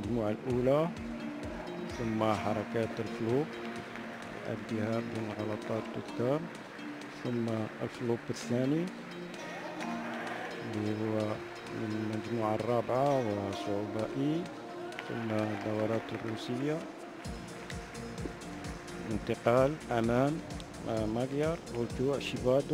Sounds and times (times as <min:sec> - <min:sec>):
Speech: 0:00.0 - 0:00.9, 0:01.9 - 0:03.5, 0:04.4 - 0:06.5, 0:07.2 - 0:16.9, 0:19.1 - 0:22.7
Music: 0:00.0 - 0:22.7.